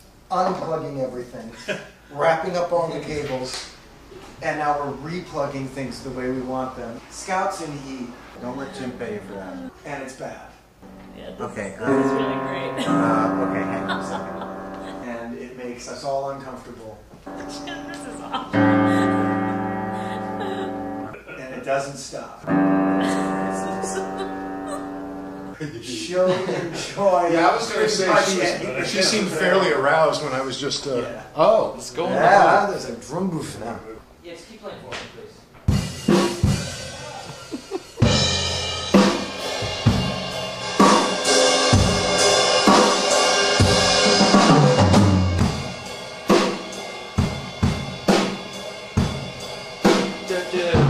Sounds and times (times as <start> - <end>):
Speech: 0.3 - 3.6, 4.4 - 10.6, 11.2 - 14.2, 15.0 - 19.0, 21.1 - 22.4, 25.6 - 35.4, 50.3 - 50.8
Music: 10.8 - 15.2, 17.3 - 21.2, 22.5 - 25.6, 35.7 - 50.8.